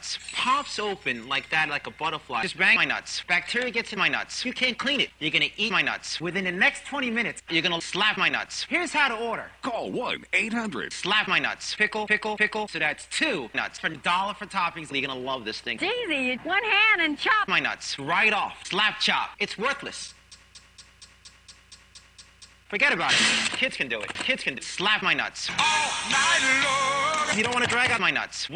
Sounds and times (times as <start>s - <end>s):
Speech: 0.0s - 20.2s, 22.7s - 25.5s, 27.3s - 28.5s
Music: 25.5s - 27.8s.